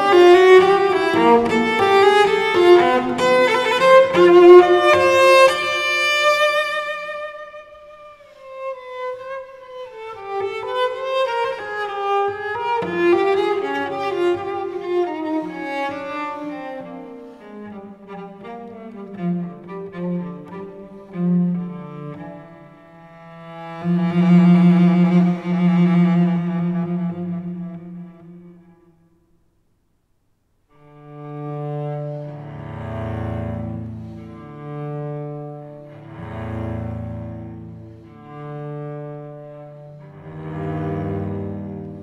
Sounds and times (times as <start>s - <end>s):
Cello: 0.0s - 29.6s, 30.6s - 42.0s.